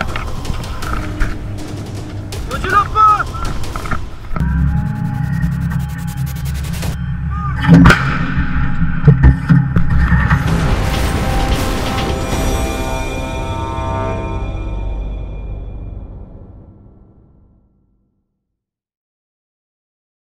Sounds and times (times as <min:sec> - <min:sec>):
Music: 0:00.0 - 0:18.5.